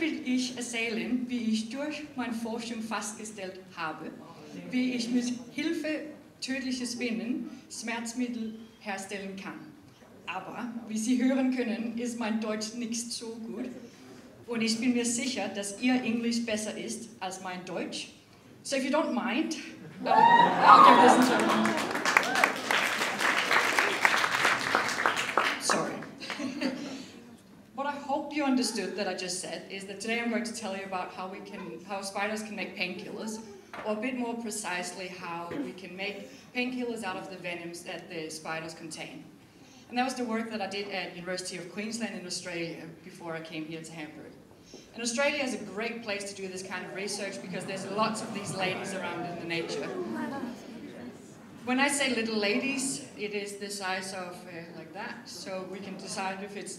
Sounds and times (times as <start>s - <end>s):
Speech: 27.8s - 39.3s, 45.0s - 56.7s.